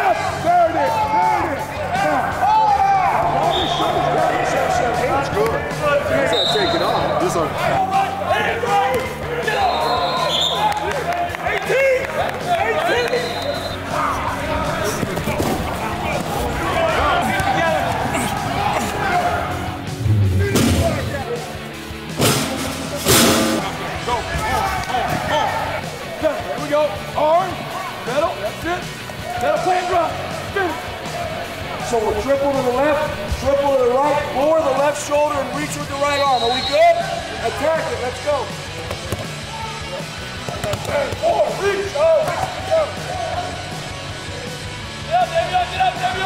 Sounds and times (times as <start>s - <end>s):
Cheering: 0.0s - 21.2s, 23.6s - 28.2s, 29.1s - 33.1s, 33.7s - 38.0s, 39.2s - 46.2s
Crowd: 0.0s - 46.2s
Music: 0.0s - 46.2s.